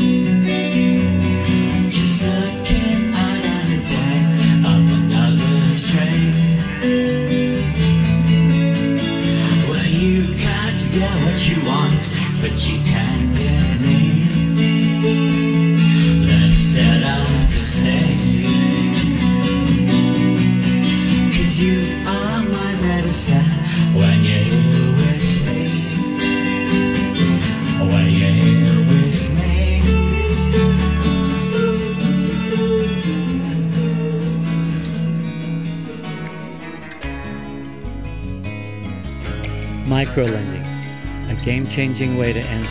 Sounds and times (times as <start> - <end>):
Music: 0.0 - 42.7
Male singing: 1.8 - 6.9, 9.4 - 14.7, 16.0 - 19.2, 21.3 - 26.6, 27.6 - 34.9, 41.3 - 42.7.